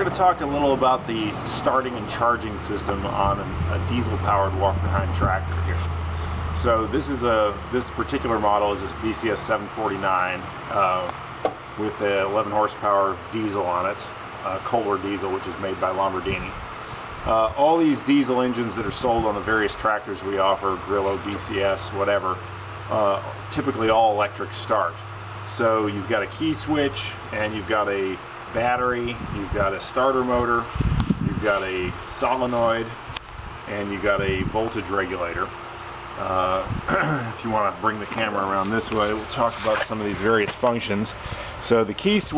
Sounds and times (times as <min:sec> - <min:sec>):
Speech: 0:00.0 - 0:05.9, 0:06.6 - 0:11.2, 0:11.8 - 0:16.6, 0:17.3 - 0:30.7, 0:31.3 - 0:33.0, 0:33.7 - 0:35.6, 0:36.2 - 0:42.3
Engine: 0:00.0 - 0:42.3.